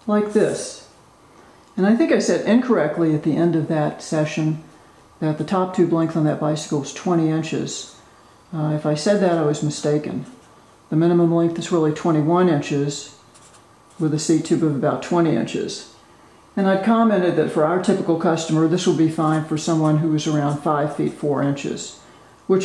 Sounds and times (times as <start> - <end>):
Speech: 0.0 - 1.0, 1.8 - 13.2, 14.0 - 16.0, 16.6 - 22.6.